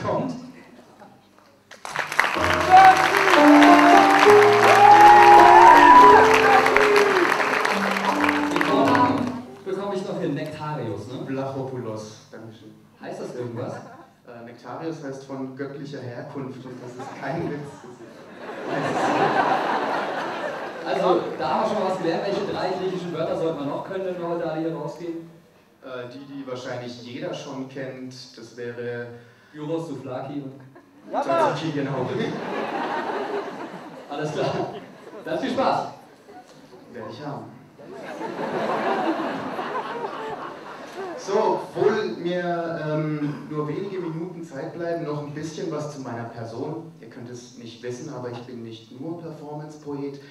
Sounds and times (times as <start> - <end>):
Speech: 0.0 - 1.2, 8.7 - 18.2, 20.8 - 32.4, 34.1 - 36.0, 36.9 - 37.6, 41.2 - 50.3.